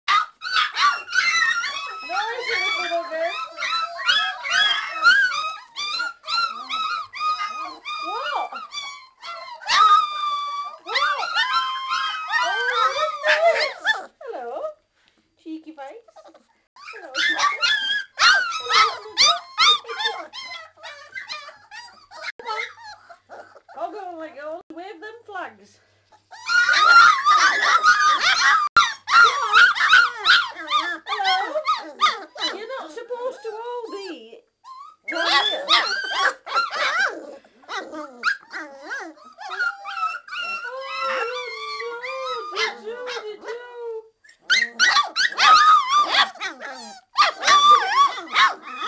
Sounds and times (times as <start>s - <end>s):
Speech: 2.0s - 3.4s, 8.0s - 8.6s, 10.9s - 11.3s, 12.4s - 14.8s, 15.4s - 16.1s, 23.8s - 25.8s, 32.4s - 34.5s, 35.1s - 35.8s, 40.7s - 44.1s.